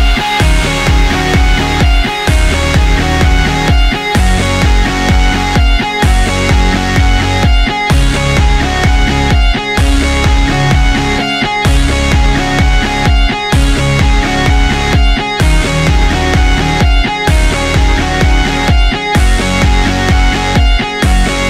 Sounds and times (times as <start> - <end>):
Dance music: 0.0 - 21.4
Funk: 0.0 - 21.4.